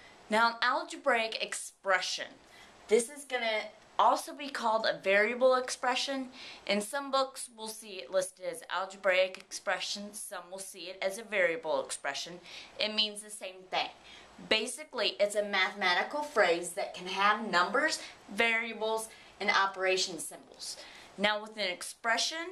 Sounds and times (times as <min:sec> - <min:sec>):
Speech: 0:00.3 - 0:22.5.